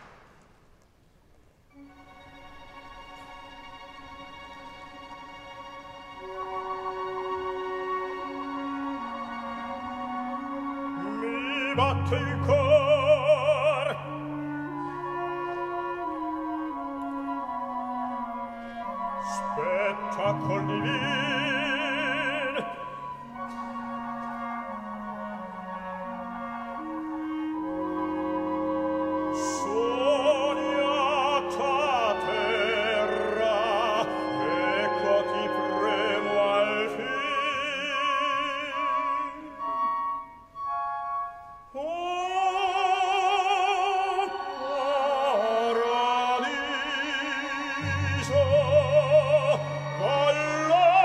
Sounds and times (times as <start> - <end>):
Opera: 0.0 - 51.0.